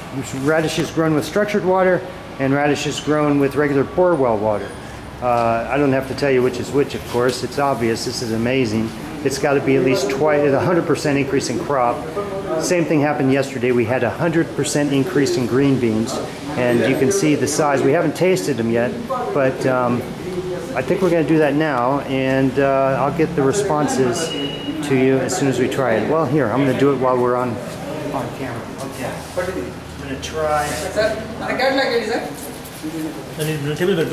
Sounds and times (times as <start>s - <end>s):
Speech: 0.2s - 32.3s.